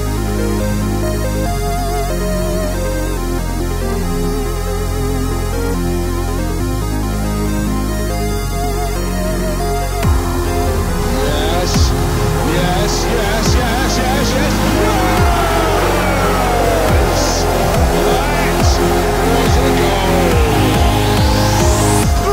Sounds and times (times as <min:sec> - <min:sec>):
Electronic music: 0:00.0 - 0:22.3.